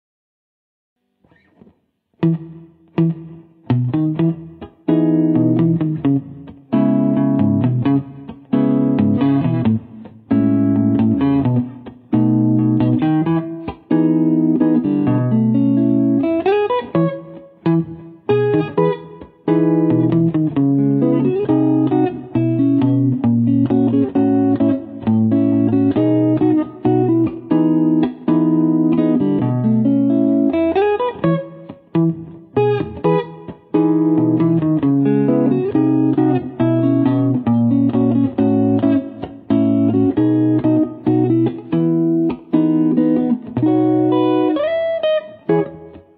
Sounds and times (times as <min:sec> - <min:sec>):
Electric guitar: 0:01.0 - 0:46.1.